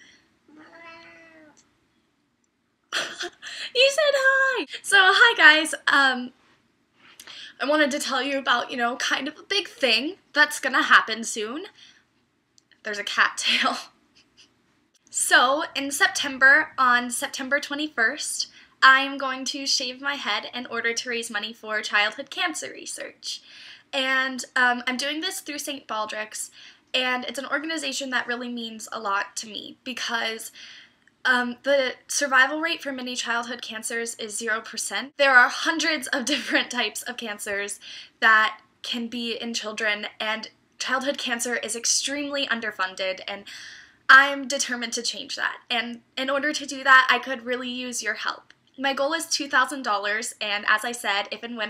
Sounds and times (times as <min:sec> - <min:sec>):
Speech: 0:03.0 - 0:06.4, 0:07.5 - 0:11.8, 0:12.9 - 0:13.9, 0:15.1 - 0:23.4, 0:24.0 - 0:30.6, 0:31.3 - 0:43.5, 0:44.1 - 0:51.7.